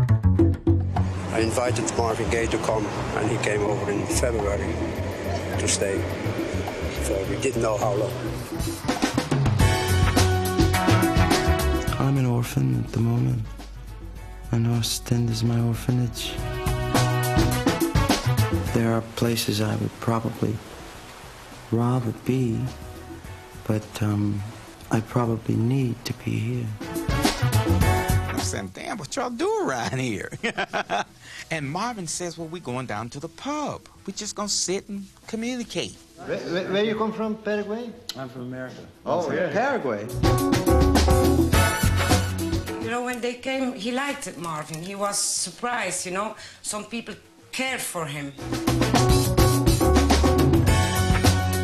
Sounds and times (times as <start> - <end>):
Music: 0.0 - 51.6
Speech: 1.3 - 4.8, 11.9 - 13.5, 14.5 - 16.4, 18.7 - 20.6, 21.7 - 22.8, 23.7 - 26.8.